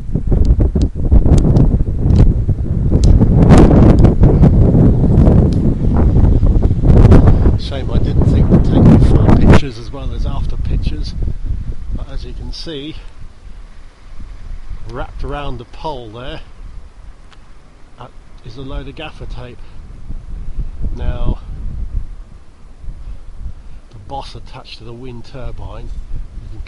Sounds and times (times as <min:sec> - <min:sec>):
Speech: 0:07.6 - 0:11.2, 0:12.0 - 0:13.1, 0:14.9 - 0:16.5, 0:18.0 - 0:19.7, 0:21.0 - 0:21.5, 0:23.9 - 0:25.9.